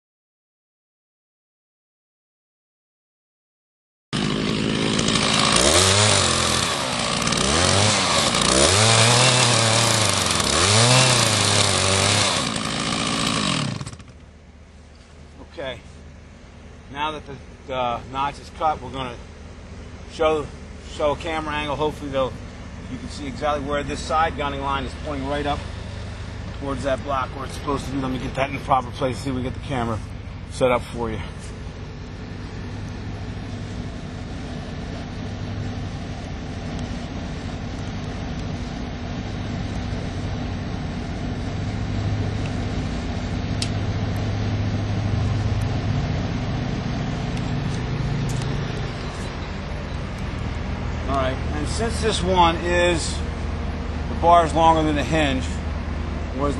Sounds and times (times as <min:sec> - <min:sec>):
Chainsaw: 0:04.2 - 0:14.3.